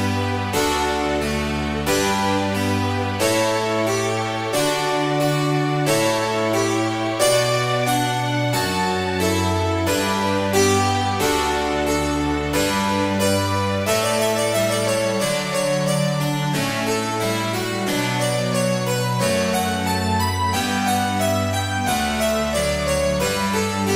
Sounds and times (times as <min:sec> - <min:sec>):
Piano: 0:00.0 - 0:23.9.